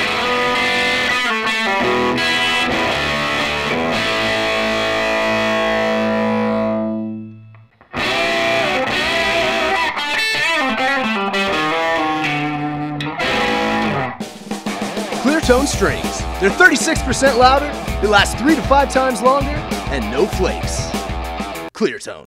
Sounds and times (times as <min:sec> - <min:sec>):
Music: 0:00.0 - 0:21.7
Speech: 0:15.2 - 0:20.9, 0:21.8 - 0:22.2.